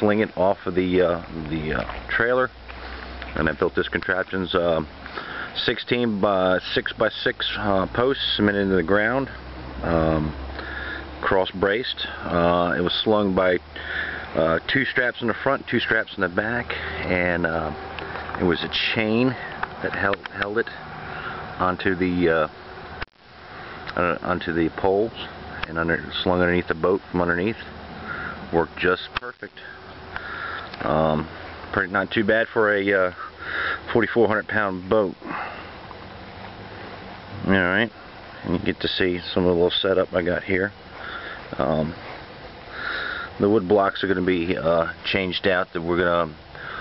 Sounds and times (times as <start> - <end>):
Speech: 0.0 - 2.5, 3.4 - 4.9, 5.6 - 10.4, 11.2 - 13.6, 14.4 - 17.8, 18.4 - 20.8, 21.6 - 22.6, 23.9 - 27.7, 28.5 - 29.8, 30.8 - 33.2, 33.9 - 35.2, 37.3 - 40.8, 41.6 - 42.0, 43.4 - 46.4.